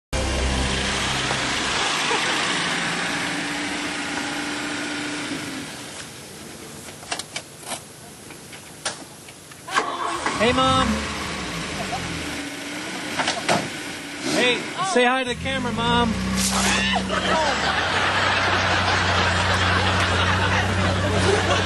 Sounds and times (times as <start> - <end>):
Car: 0.2 - 6.2, 10.0 - 21.6.